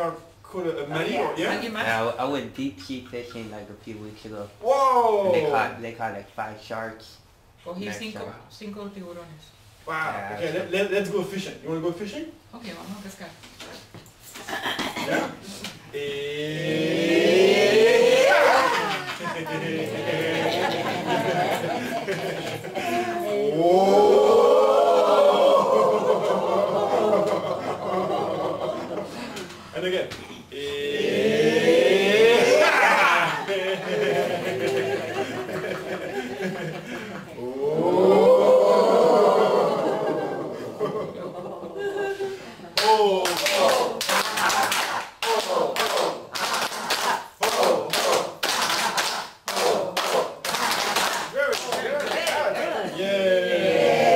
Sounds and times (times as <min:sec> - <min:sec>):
Snicker: 0:18.7 - 0:23.2, 0:25.6 - 0:29.5, 0:32.3 - 0:37.4
Clapping: 0:42.8 - 0:52.6.